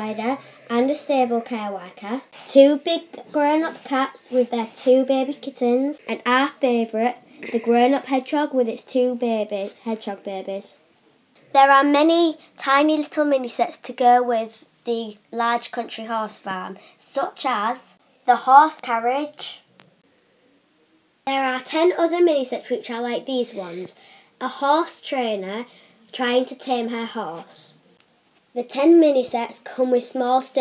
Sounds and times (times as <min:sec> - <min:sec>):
Speech: 0:00.0 - 0:10.8, 0:11.5 - 0:19.7, 0:21.3 - 0:27.8, 0:28.6 - 0:30.6.